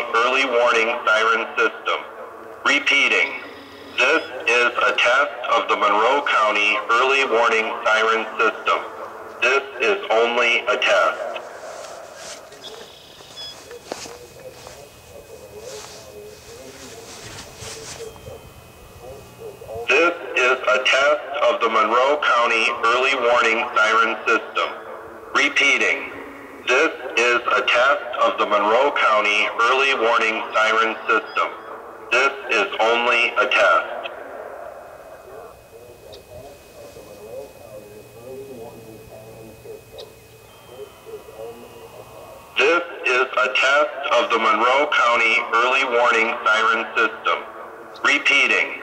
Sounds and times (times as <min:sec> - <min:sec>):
Speech: 0:00.0 - 0:11.5, 0:13.6 - 0:34.2, 0:35.2 - 0:48.8.